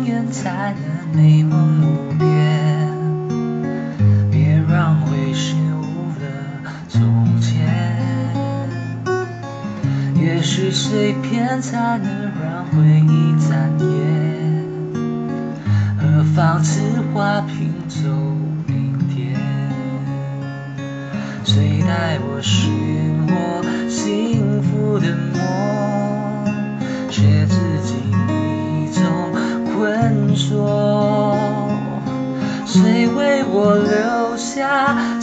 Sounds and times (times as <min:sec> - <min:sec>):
Acoustic guitar: 0:00.0 - 0:35.2.